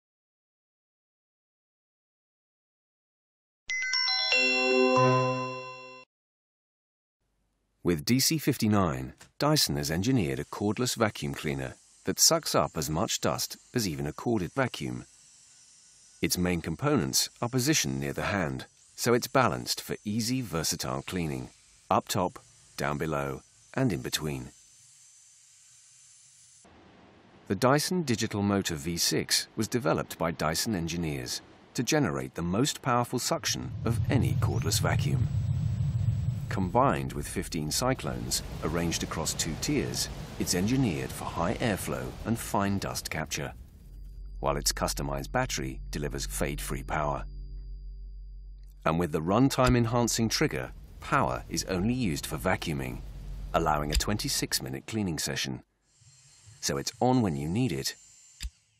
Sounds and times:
Music: 0:03.7 - 0:06.1
Speech: 0:07.8 - 0:15.1, 0:16.2 - 0:24.5, 0:27.5 - 0:35.3, 0:36.5 - 0:43.6, 0:44.4 - 0:47.2, 0:48.9 - 0:53.0, 0:53.6 - 0:55.6, 0:56.6 - 0:58.0.

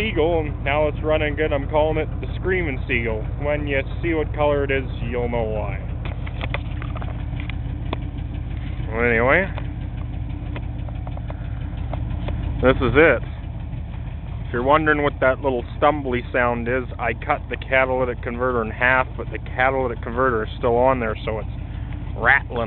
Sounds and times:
Speech: 0:00.0 - 0:05.8, 0:08.9 - 0:09.6, 0:12.6 - 0:13.3, 0:14.5 - 0:21.5, 0:22.2 - 0:22.6
Vehicle: 0:00.0 - 0:22.6.

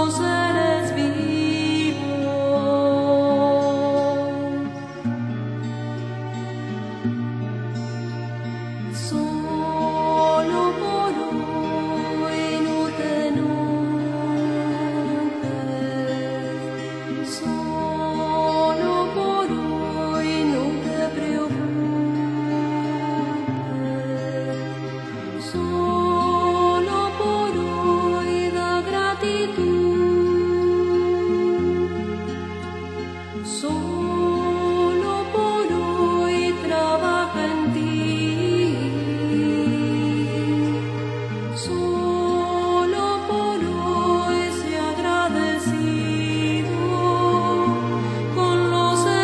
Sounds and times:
New-age music: 0:00.0 - 0:49.2.

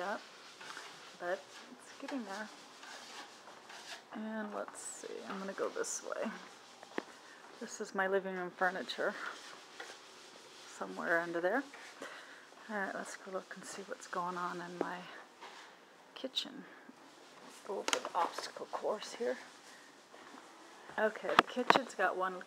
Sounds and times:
Speech: 0:01.2 - 0:02.5, 0:04.2 - 0:06.4, 0:07.6 - 0:09.2, 0:10.8 - 0:11.7, 0:12.6 - 0:15.2, 0:16.2 - 0:16.8, 0:17.6 - 0:19.5, 0:21.0 - 0:22.4.

